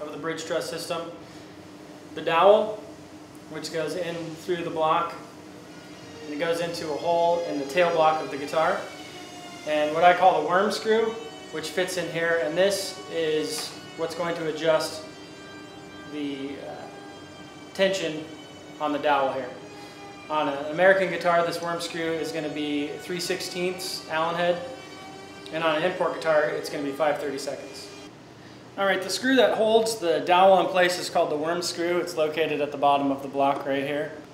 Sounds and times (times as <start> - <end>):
Speech: 0.0 - 1.2, 2.2 - 2.8, 3.5 - 5.2, 6.3 - 8.9, 9.7 - 15.1, 16.2 - 17.0, 17.8 - 19.6, 20.3 - 24.7, 25.5 - 28.0, 28.8 - 34.2.